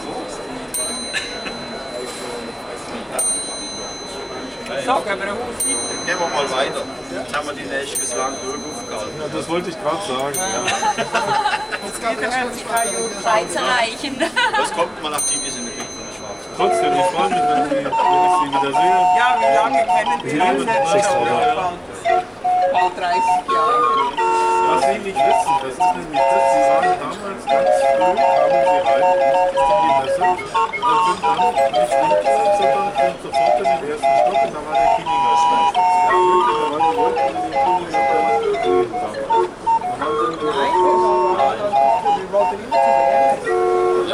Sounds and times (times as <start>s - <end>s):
Speech: 11.8s - 44.1s
Music: 15.2s - 44.1s.